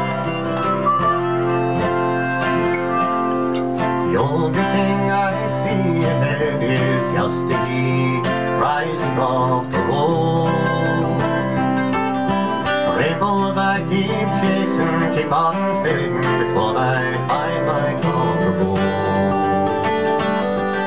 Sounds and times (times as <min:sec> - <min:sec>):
Music: 0:00.0 - 0:20.8
Male singing: 0:04.0 - 0:11.5, 0:12.9 - 0:19.8.